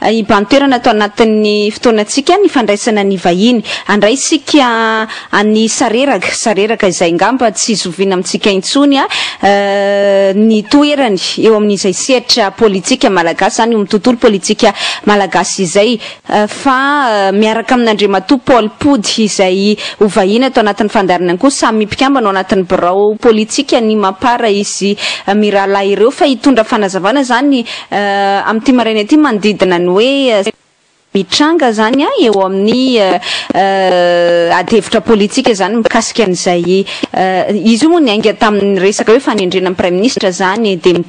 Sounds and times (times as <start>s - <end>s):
Speech: 0.0s - 30.6s, 31.2s - 41.0s.